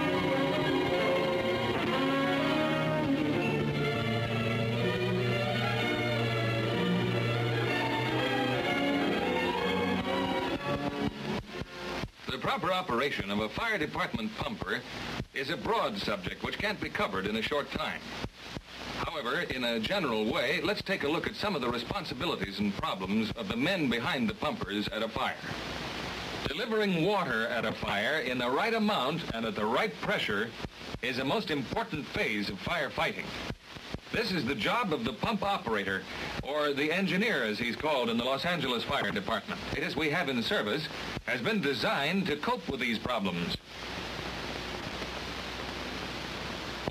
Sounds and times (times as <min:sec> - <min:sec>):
Speech: 0:12.3 - 0:18.1, 0:19.0 - 0:25.6, 0:26.4 - 0:33.3, 0:34.1 - 0:43.6.